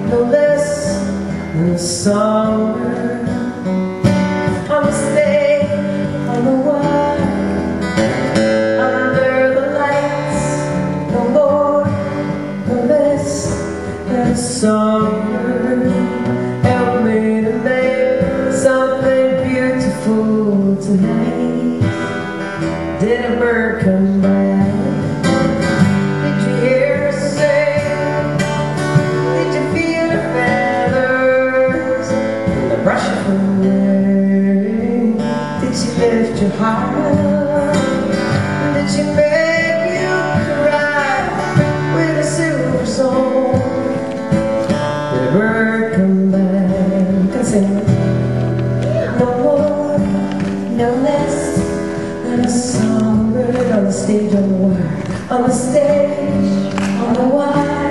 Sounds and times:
Music: 0:00.0 - 0:57.9.

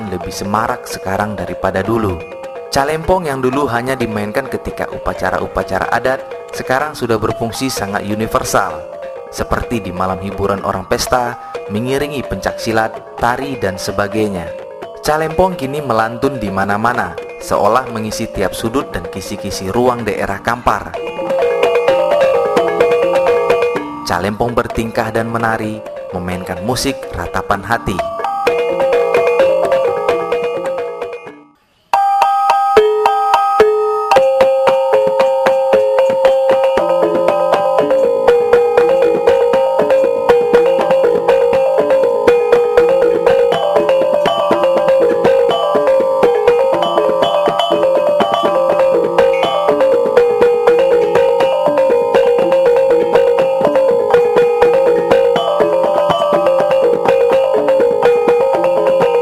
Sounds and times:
Speech: 0:00.0 - 0:02.2, 0:02.8 - 0:21.0, 0:24.1 - 0:28.1
Music: 0:00.0 - 0:59.2.

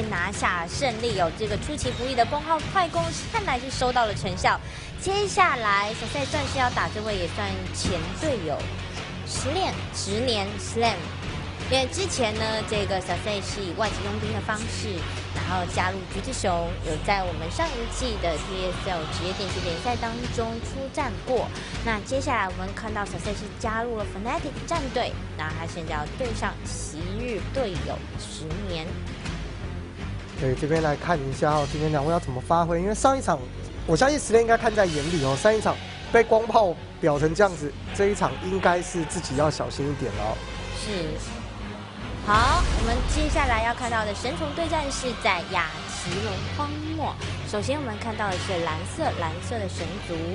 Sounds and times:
Music: 0:00.0 - 0:50.3.

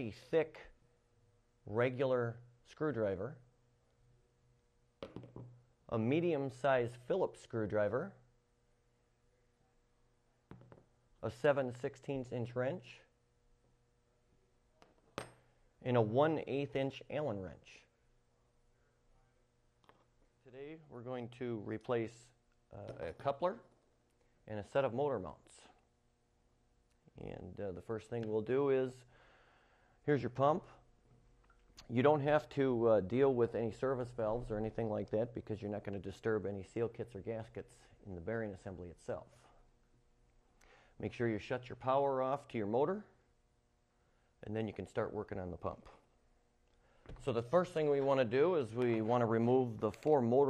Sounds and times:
Speech: 0:00.0 - 0:00.8, 0:01.7 - 0:03.5, 0:05.9 - 0:08.3, 0:11.2 - 0:13.1, 0:15.8 - 0:17.9, 0:20.4 - 0:23.7, 0:24.5 - 0:25.8, 0:27.1 - 0:29.1, 0:30.1 - 0:30.8, 0:31.8 - 0:39.6, 0:41.0 - 0:43.2, 0:44.4 - 0:46.0, 0:47.2 - 0:50.5.

